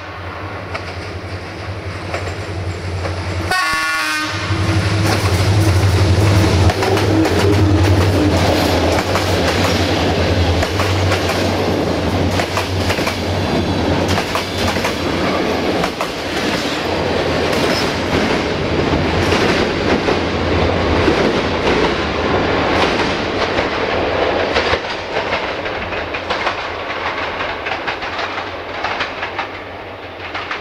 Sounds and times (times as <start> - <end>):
Railroad car, train wagon: 0.0 - 30.6
Train: 0.0 - 30.6
Clickety-clack: 0.7 - 3.2, 5.0 - 13.4, 14.0 - 20.3, 22.7 - 30.6.